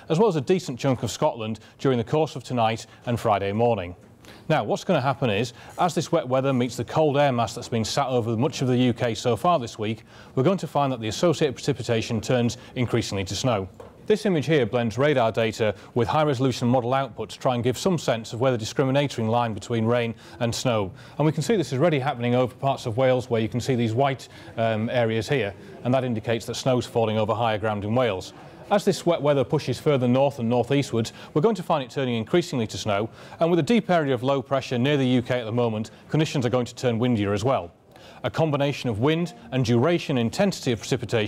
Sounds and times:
Speech: 0:00.0 - 0:41.2.

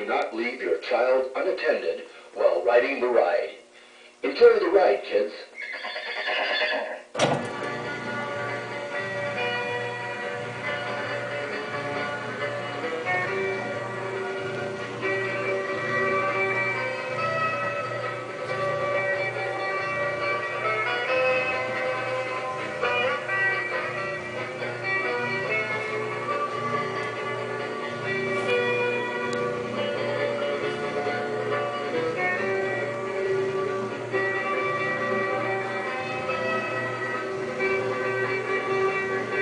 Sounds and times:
Music: 0:00.0 - 0:03.4, 0:07.1 - 0:39.4.

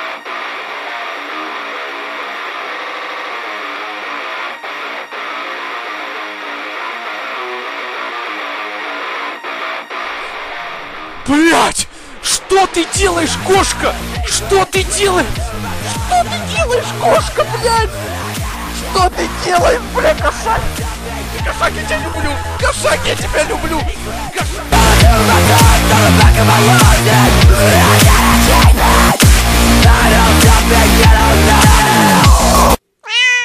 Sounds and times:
Music: 0:00.0 - 0:32.8
Meow: 0:33.0 - 0:33.4.

